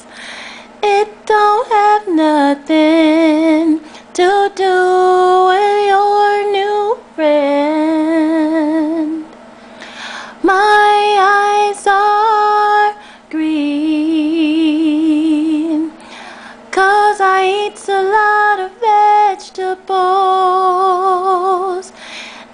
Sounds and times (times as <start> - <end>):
Female singing: 0.8 - 9.3, 10.4 - 16.0, 16.7 - 22.0.